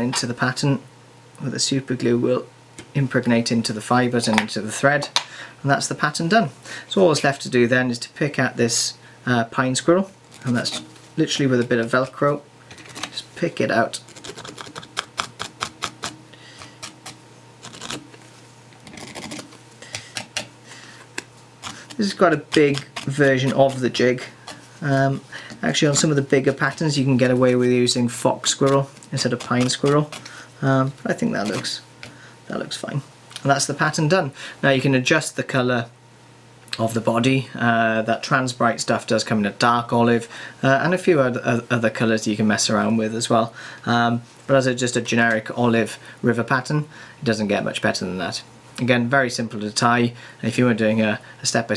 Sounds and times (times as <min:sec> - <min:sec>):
Speech: 0:00.0 - 0:12.5, 0:13.1 - 0:14.1, 0:22.0 - 0:31.9, 0:32.5 - 0:35.9, 0:36.7 - 0:51.7.